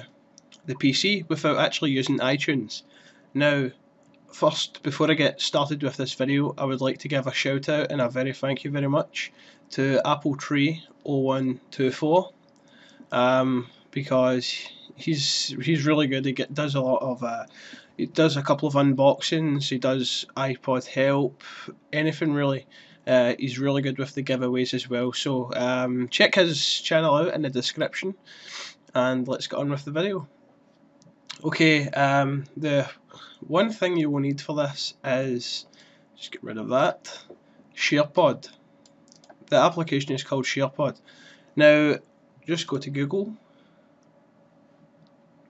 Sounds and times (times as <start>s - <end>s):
Speech: 0.0s - 12.4s, 13.1s - 30.3s, 31.3s - 38.6s, 39.3s - 41.0s, 41.6s - 43.4s.